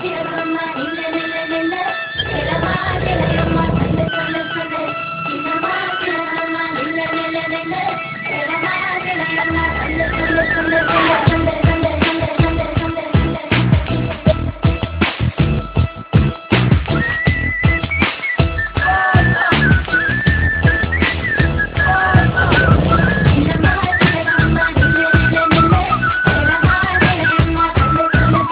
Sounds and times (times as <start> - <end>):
Music: 0.0 - 28.5.